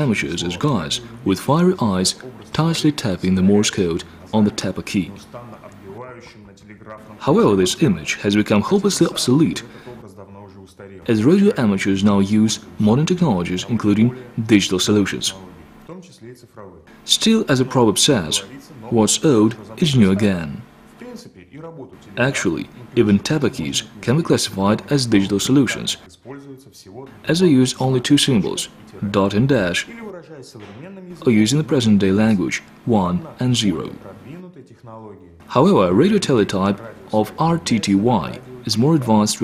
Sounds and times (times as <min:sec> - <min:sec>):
Speech: 0:00.0 - 0:39.4.